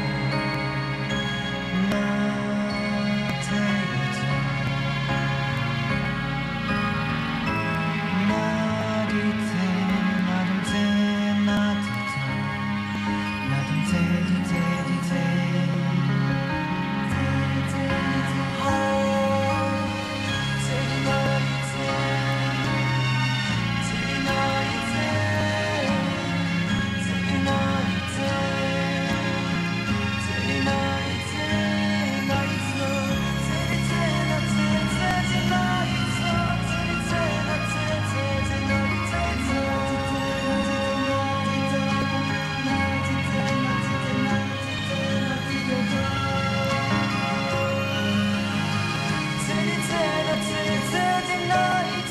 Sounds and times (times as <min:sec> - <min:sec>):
Music: 0:00.0 - 0:52.1.